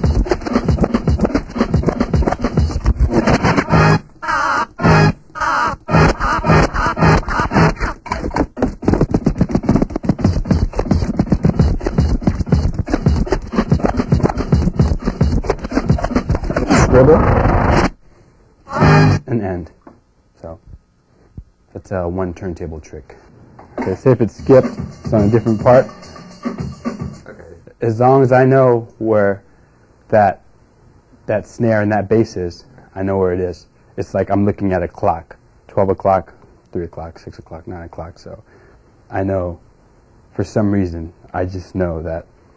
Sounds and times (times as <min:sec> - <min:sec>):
Scratching (performance technique): 0:00.0 - 0:18.0, 0:18.7 - 0:19.3
Speech: 0:16.7 - 0:17.4, 0:19.2 - 0:19.8, 0:20.4 - 0:20.7, 0:21.7 - 0:25.9, 0:27.3 - 0:29.4, 0:30.1 - 0:30.4, 0:31.3 - 0:38.5, 0:39.1 - 0:39.6, 0:40.3 - 0:42.3.